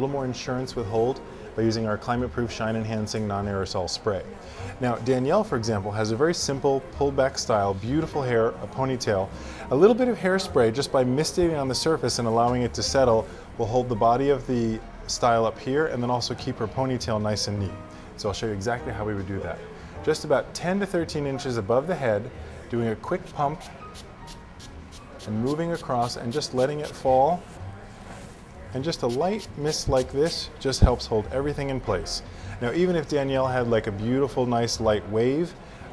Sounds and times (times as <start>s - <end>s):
Speech: 0.0s - 23.7s, 25.2s - 27.5s, 28.7s - 35.6s
Music: 0.0s - 35.9s.